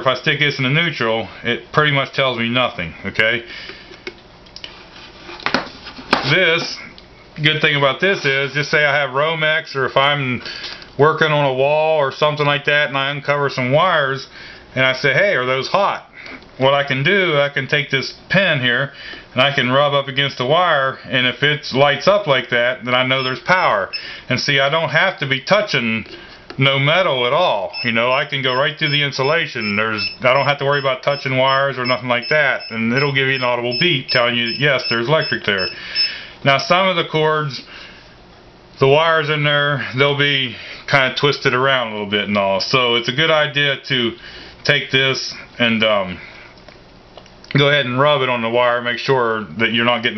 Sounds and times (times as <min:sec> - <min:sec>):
Speech: 0:00.0 - 0:03.5, 0:06.2 - 0:35.8, 0:36.4 - 0:37.7, 0:38.8 - 0:46.3, 0:47.5 - 0:50.1
Alarm clock: 0:23.2 - 0:24.1, 0:27.8 - 0:36.2.